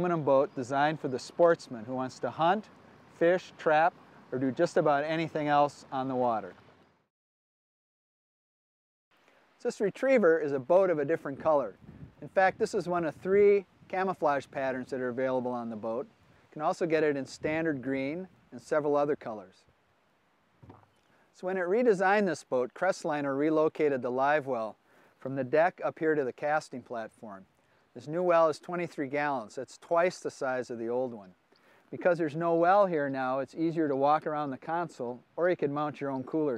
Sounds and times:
Speech: 0:00.0 - 0:06.6, 0:09.6 - 0:19.6, 0:21.4 - 0:31.4, 0:32.0 - 0:36.5.

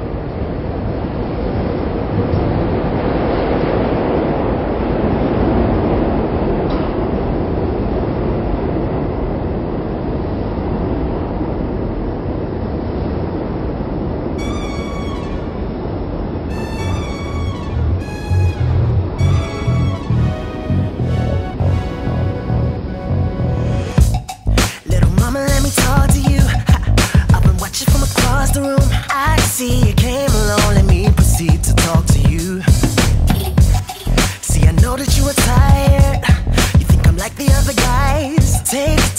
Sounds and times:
Music: 0:16.5 - 0:39.1.

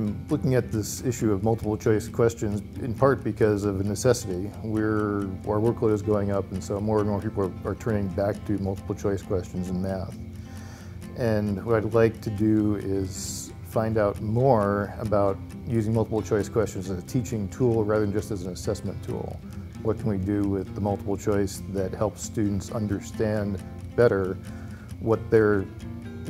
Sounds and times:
Speech: 0:00.0 - 0:10.2, 0:11.2 - 0:24.4, 0:25.0 - 0:25.7
Music: 0:00.0 - 0:26.3.

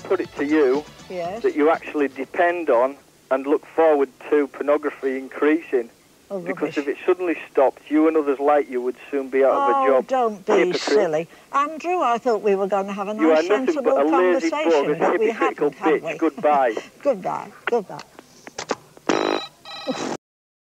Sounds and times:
Speech: 0:00.0 - 0:18.1.

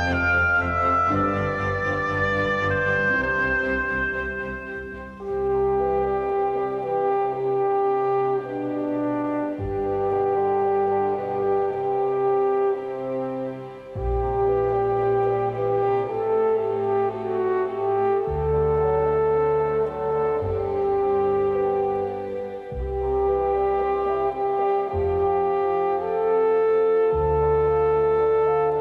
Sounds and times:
Brass instrument: 0:00.0 - 0:28.8.

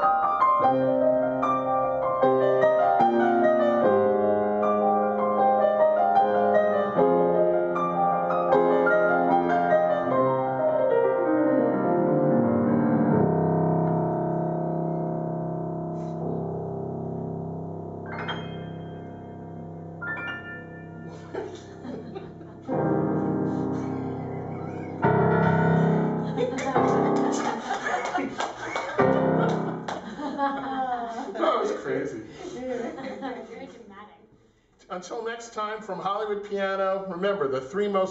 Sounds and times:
Piano: 0:00.0 - 0:31.6.

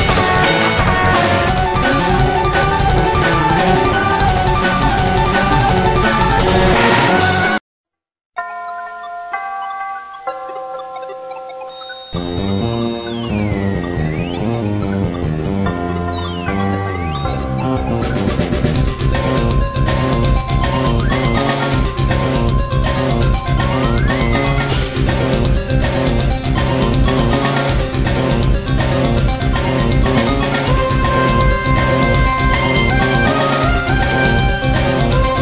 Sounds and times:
Music: 0:00.0 - 0:07.6, 0:08.4 - 0:35.4.

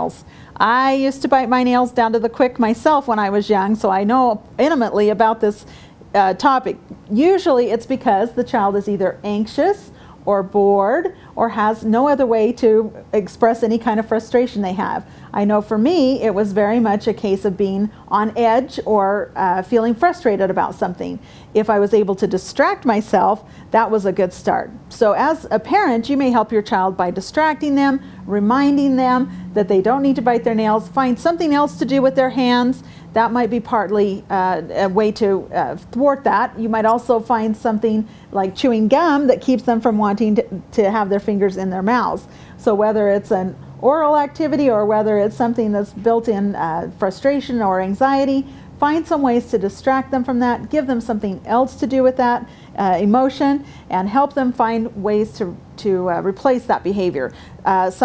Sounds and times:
Speech: 0:00.0 - 0:58.0.

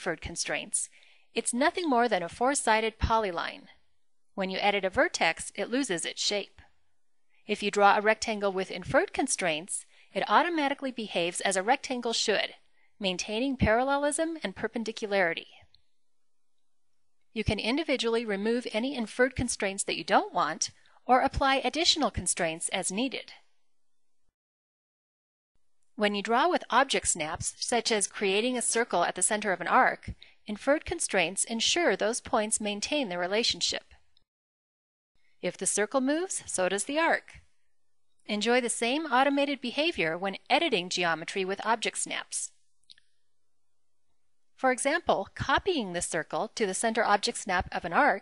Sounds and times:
Speech: 0:00.0 - 0:03.8, 0:04.4 - 0:06.6, 0:07.5 - 0:15.6, 0:17.4 - 0:23.4, 0:26.0 - 0:34.0, 0:35.4 - 0:37.4, 0:38.3 - 0:42.6, 0:44.6 - 0:48.2.

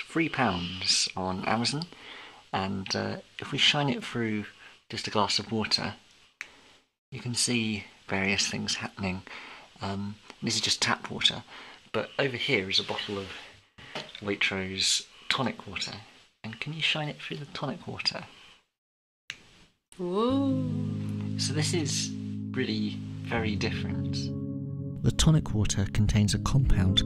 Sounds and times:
Speech: 0:00.0 - 0:06.0, 0:07.2 - 0:13.5, 0:14.2 - 0:18.4, 0:20.0 - 0:20.7, 0:21.4 - 0:24.3, 0:25.0 - 0:27.0.

